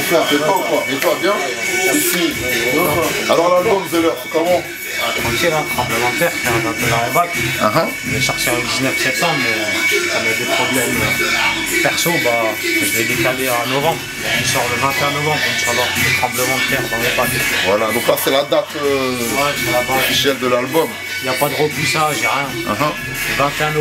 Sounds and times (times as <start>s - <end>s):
Speech: 0.0s - 11.2s, 11.8s - 23.8s
Music: 0.0s - 23.8s.